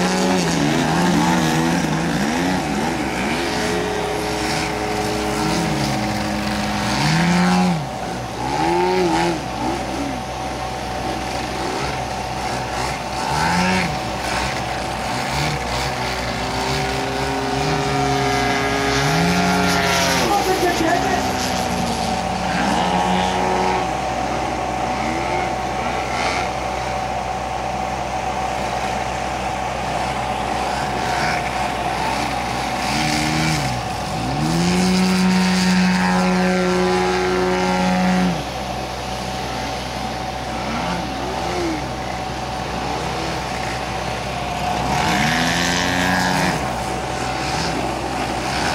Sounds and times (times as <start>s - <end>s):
Vehicle: 0.0s - 48.7s.